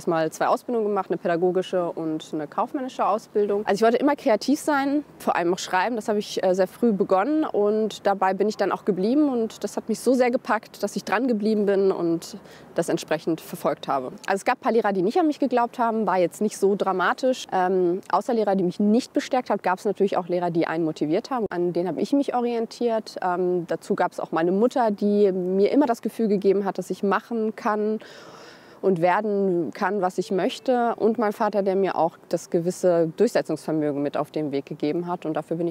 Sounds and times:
Speech: 0:00.0 - 0:28.0, 0:28.8 - 0:35.7.

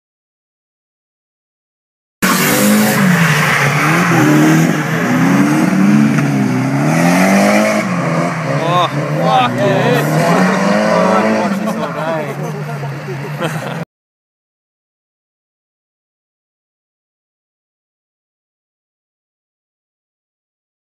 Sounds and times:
Car: 0:02.2 - 0:13.9
Speech: 0:08.6 - 0:13.1.

